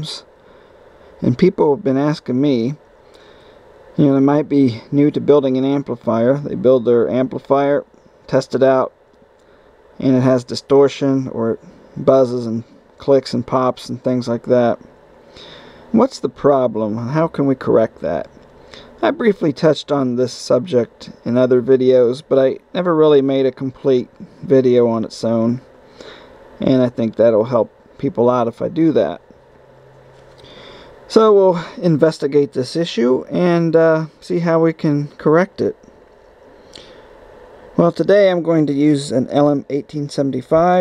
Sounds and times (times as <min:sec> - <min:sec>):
Speech: 0:00.0 - 0:00.3, 0:01.2 - 0:02.8, 0:04.0 - 0:09.0, 0:10.0 - 0:14.8, 0:15.9 - 0:18.4, 0:19.0 - 0:25.7, 0:26.6 - 0:29.3, 0:31.1 - 0:35.8, 0:37.8 - 0:40.8.